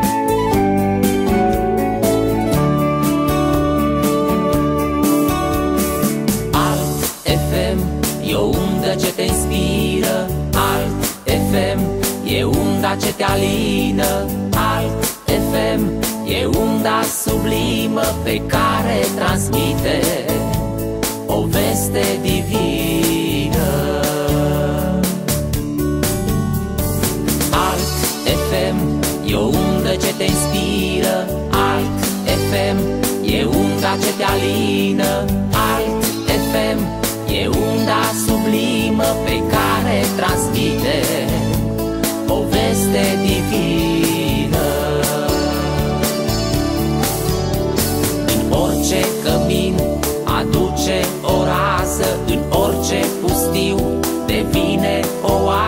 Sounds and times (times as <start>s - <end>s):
Music: 0.0s - 55.6s.